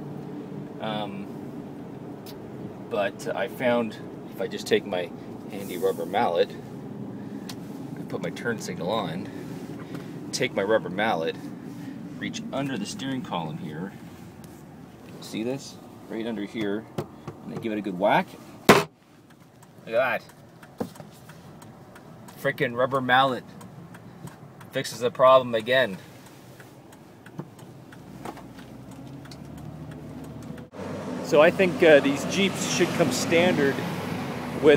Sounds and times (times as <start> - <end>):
Vehicle: 0.0 - 34.7.